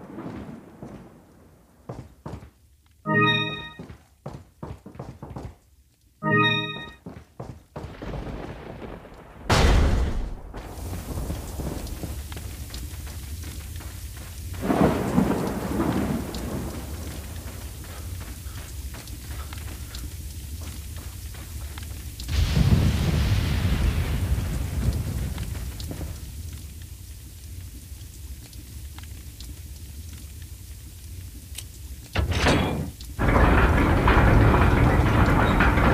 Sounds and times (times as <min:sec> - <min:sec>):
Run: 0:01.8 - 0:08.6, 0:10.6 - 0:22.6, 0:24.5 - 0:30.4.